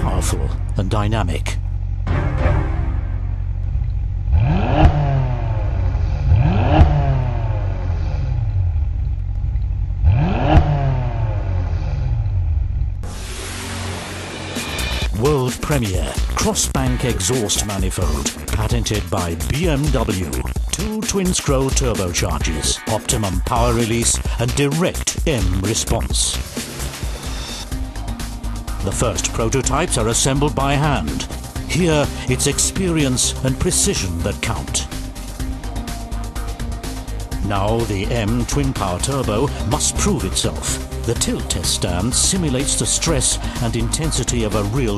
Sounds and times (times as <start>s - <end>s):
Speech: 0.0s - 1.6s, 15.1s - 26.4s, 28.8s - 34.9s, 37.4s - 44.9s
Music: 0.0s - 4.0s, 13.0s - 44.9s.